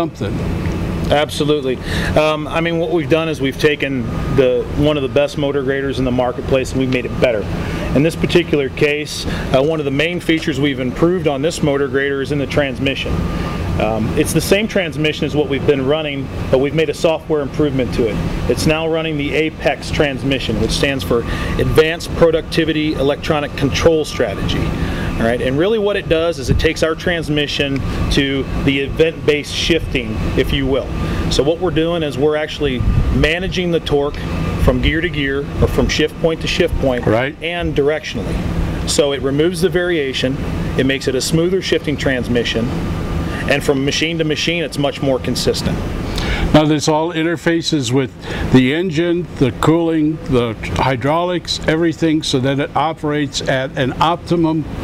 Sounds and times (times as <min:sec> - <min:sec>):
Speech: 0:00.0 - 0:00.4, 0:01.1 - 0:13.2, 0:13.8 - 0:38.3, 0:38.9 - 0:42.7, 0:43.4 - 0:45.8, 0:46.5 - 0:54.7.